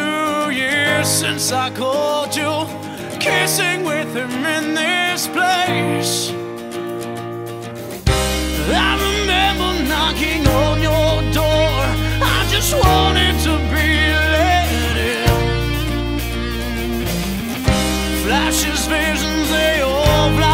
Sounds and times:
Music: 0.0 - 20.5.

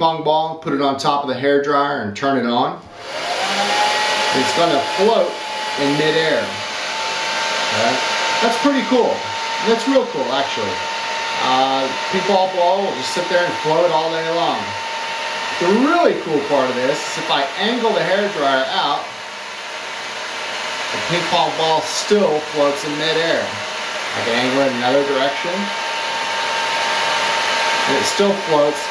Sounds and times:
Speech: 0.0 - 2.8, 4.4 - 6.6, 7.7 - 10.8, 11.4 - 14.8, 15.6 - 19.1, 21.0 - 25.8, 27.9 - 28.9.

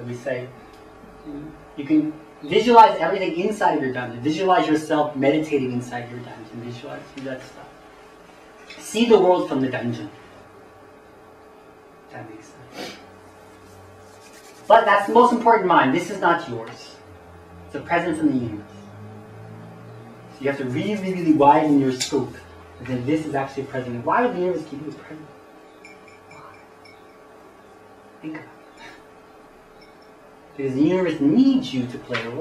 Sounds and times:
Speech: 0.0 - 0.6, 1.3 - 7.8, 8.7 - 10.2, 12.1 - 12.7, 14.7 - 17.0, 17.7 - 18.7, 20.4 - 25.3, 28.2 - 28.5, 30.6 - 32.4.

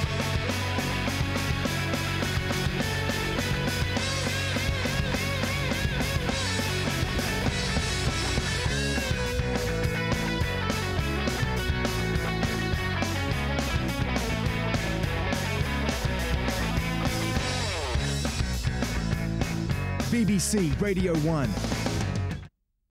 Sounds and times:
Music: 0.0 - 22.5
Speech: 20.0 - 21.6.

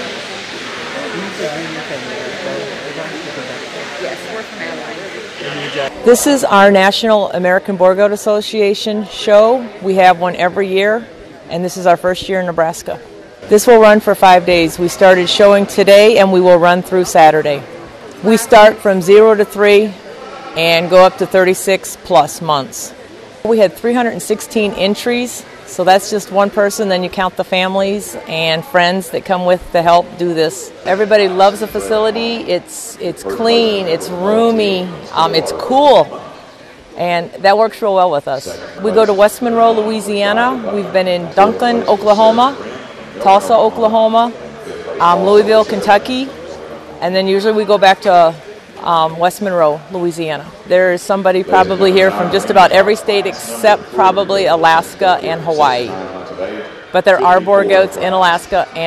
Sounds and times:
Speech: 0.9 - 17.6, 18.2 - 20.0, 20.6 - 22.9, 23.5 - 36.2, 37.0 - 46.4, 47.0 - 58.8.

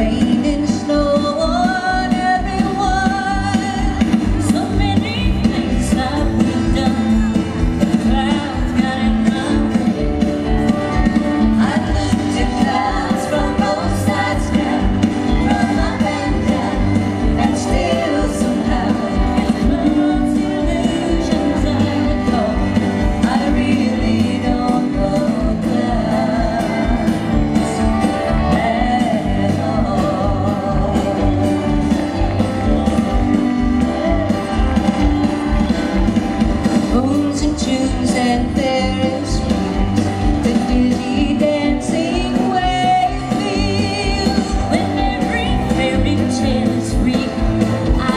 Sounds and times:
Music: 0.0 - 48.1.

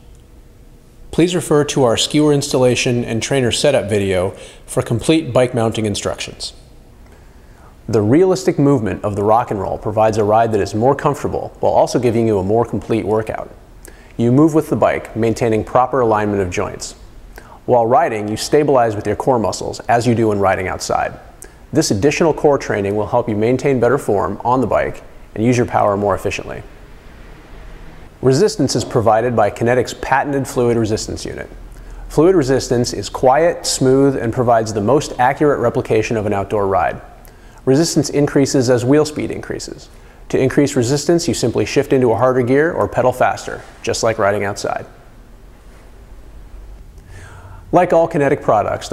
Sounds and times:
Speech: 1.1 - 6.6, 7.9 - 13.6, 14.2 - 17.0, 17.6 - 26.7, 28.2 - 45.0, 47.7 - 48.9.

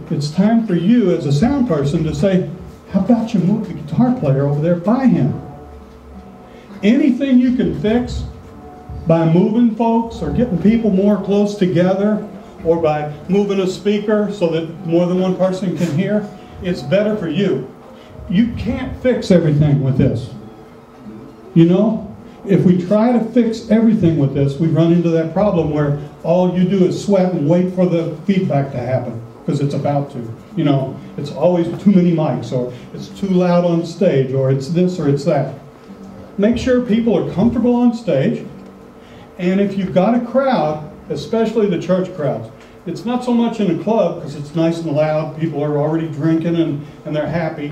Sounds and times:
Speech: 0.0 - 5.5, 6.8 - 8.4, 9.0 - 20.5, 21.5 - 35.7, 36.4 - 38.6, 39.4 - 47.7.

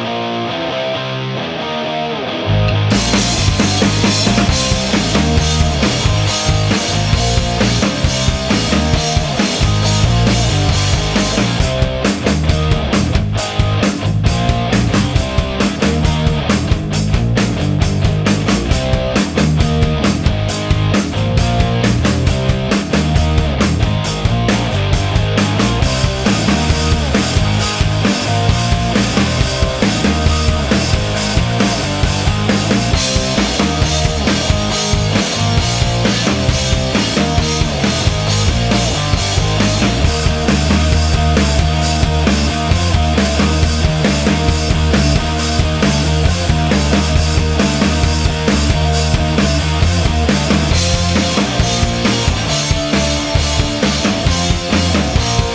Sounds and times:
Music: 0.0 - 55.5.

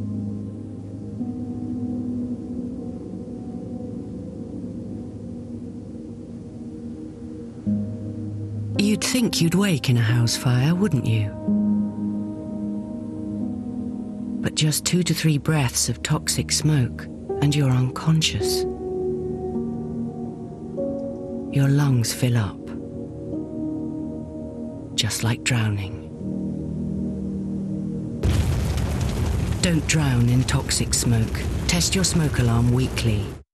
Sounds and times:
Music: 0.0 - 33.4
Speech: 8.8 - 11.4, 14.5 - 18.7, 21.6 - 22.8, 25.0 - 26.1, 29.6 - 33.5
Crackle: 28.2 - 33.4.

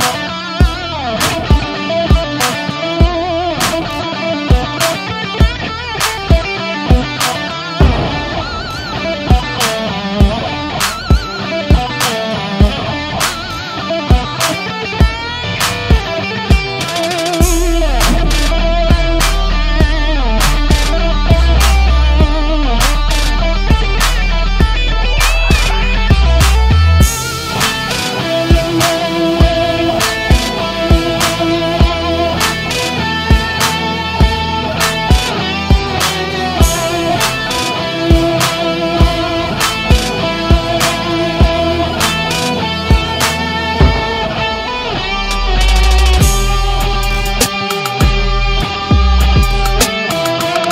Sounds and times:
Heavy metal: 0.0 - 50.7.

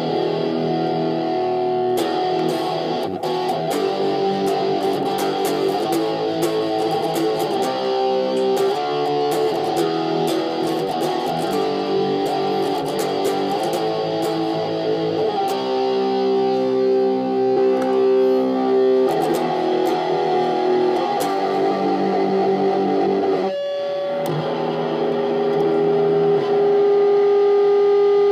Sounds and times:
Music: 0.0 - 28.3.

